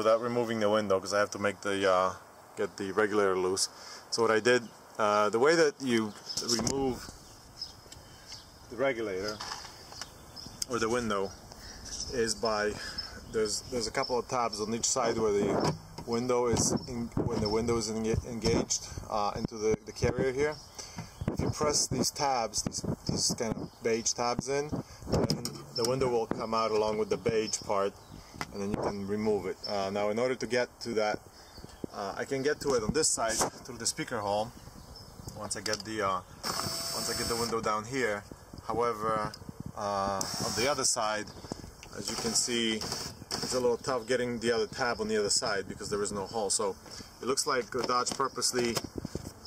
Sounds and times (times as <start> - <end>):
Speech: 0.0 - 7.1, 8.7 - 9.4, 10.6 - 11.4, 12.0 - 20.6, 21.3 - 31.2, 31.9 - 34.5, 35.3 - 36.3, 37.0 - 41.3, 41.9 - 48.8
Outside, rural or natural: 0.0 - 49.4.